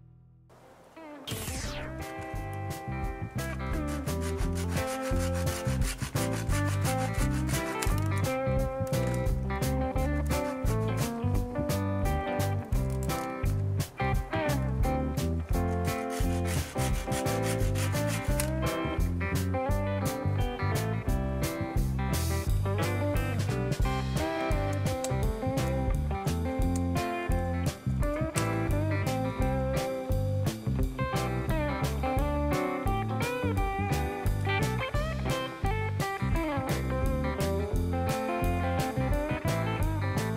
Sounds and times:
Music: 0.0 - 40.3.

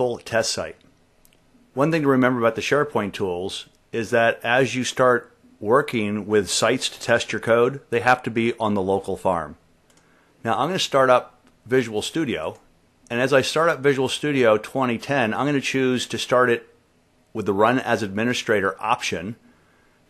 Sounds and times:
Speech: 0.0 - 0.9, 1.8 - 9.6, 10.4 - 19.4.

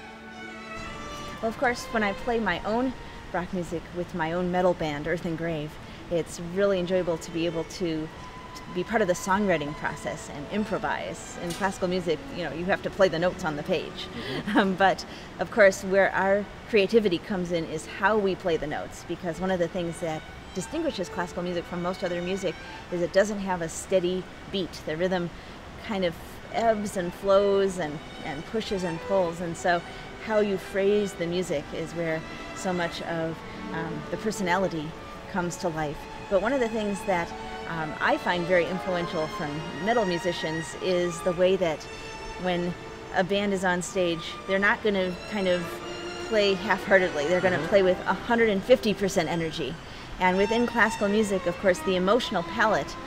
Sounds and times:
Music: 0.0 - 53.0
Speech: 1.3 - 41.8, 42.4 - 53.0.

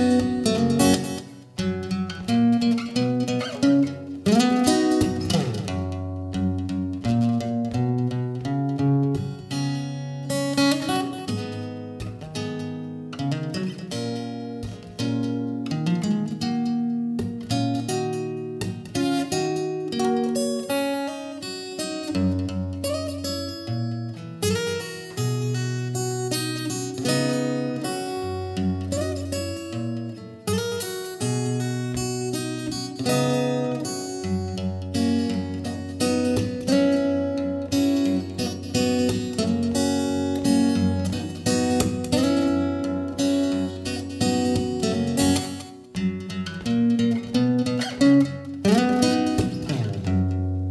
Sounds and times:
Acoustic guitar: 0.0 - 50.7
Strum: 0.0 - 50.7.

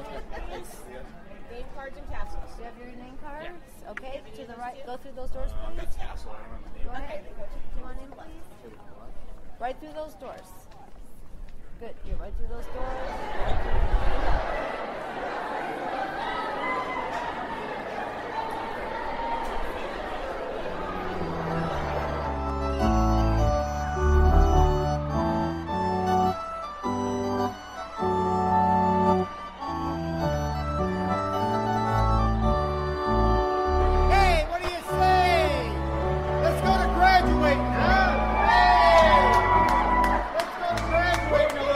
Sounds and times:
Music: 20.6 - 41.7.

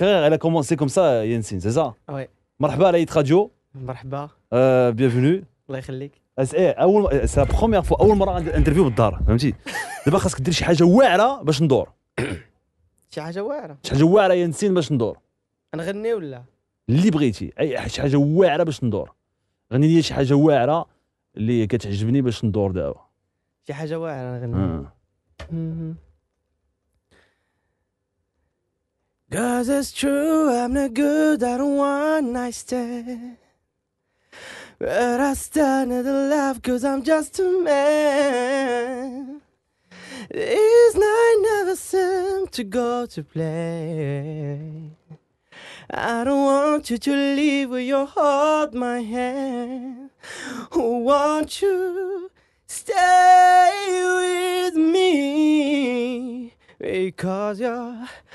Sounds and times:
Speech: 0.0 - 12.0, 13.1 - 19.1, 19.7 - 23.1, 23.7 - 25.0.

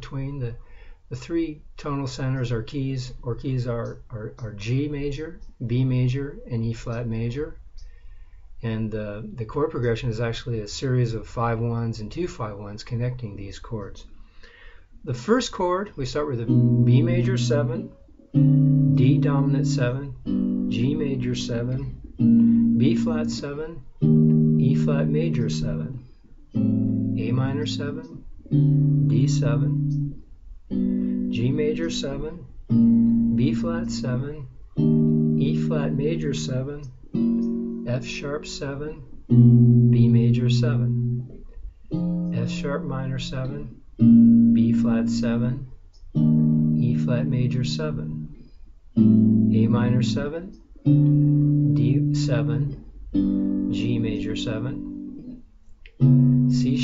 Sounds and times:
Speech: 0.0 - 7.6, 8.6 - 14.1, 15.0 - 18.0, 19.0 - 22.1, 22.8 - 23.9, 24.6 - 26.0, 27.2 - 28.3, 29.1 - 29.9, 31.3 - 32.5, 33.3 - 34.6, 35.4 - 37.0, 37.9 - 39.2, 39.9 - 41.0, 42.3 - 43.8, 44.5 - 45.7, 46.8 - 48.4, 49.5 - 50.6, 51.8 - 52.8, 53.7 - 54.9, 56.5 - 56.8
Strum: 16.4 - 48.4, 49.0 - 55.4, 56.0 - 56.8.

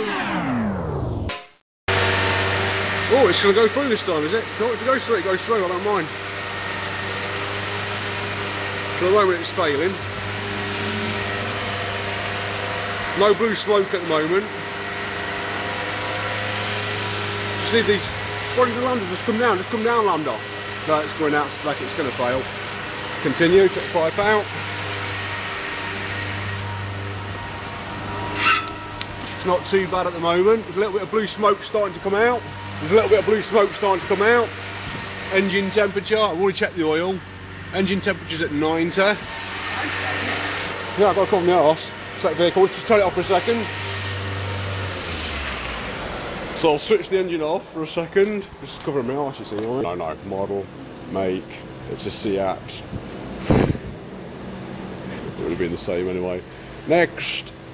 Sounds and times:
Speech: 3.1 - 6.1, 9.0 - 10.0, 13.2 - 14.5, 17.6 - 22.5, 23.2 - 24.5, 29.4 - 34.5, 35.3 - 43.7, 46.6 - 52.9, 55.2 - 57.2.

